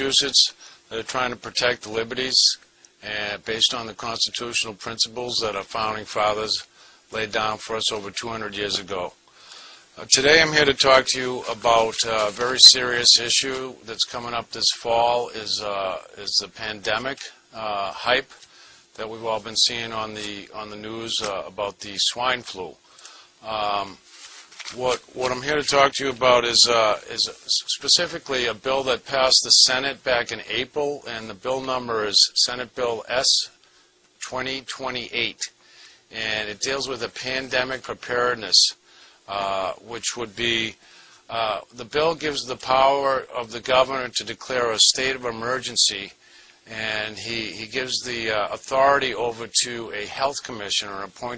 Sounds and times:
Speech: 0.0s - 9.2s, 10.0s - 22.8s, 23.4s - 24.0s, 24.7s - 33.6s, 34.2s - 51.3s.

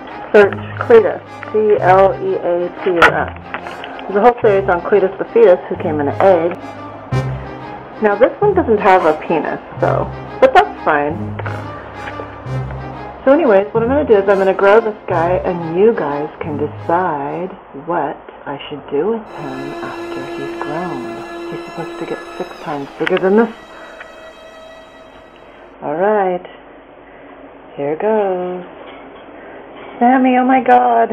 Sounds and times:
Music: 0.0s - 17.6s, 19.3s - 25.8s
Speech: 0.3s - 3.3s, 4.1s - 6.6s, 8.0s - 11.2s, 13.3s - 21.2s, 27.7s - 28.7s, 29.9s - 31.1s.

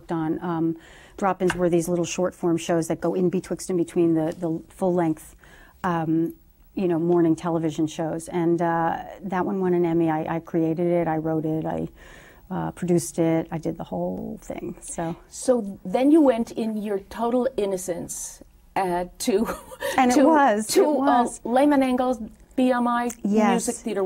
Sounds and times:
Female speech, woman speaking: 0.0s - 11.9s, 12.5s - 24.0s.

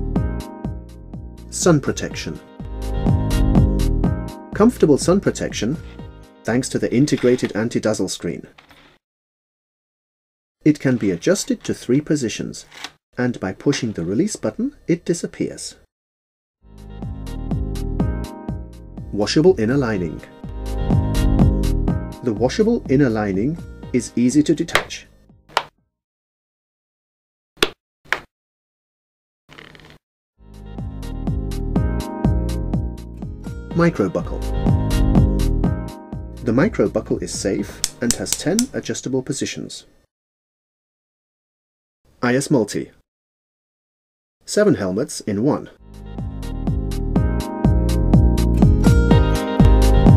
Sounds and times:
Music: 0.0s - 7.6s, 16.6s - 25.5s, 30.4s - 38.7s, 45.8s - 50.1s
Speech: 1.5s - 2.4s, 4.6s - 5.8s, 6.5s - 8.5s, 10.6s - 15.8s, 19.1s - 20.4s, 22.2s - 25.1s, 33.7s - 34.5s, 36.4s - 39.9s, 42.2s - 43.0s, 44.5s - 45.8s.

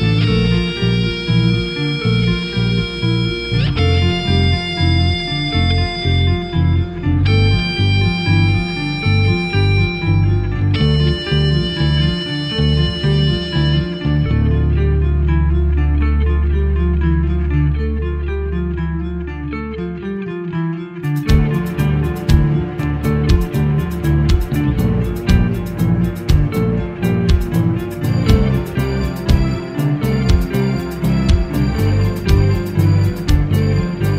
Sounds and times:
Strum: 0.0s - 34.1s.

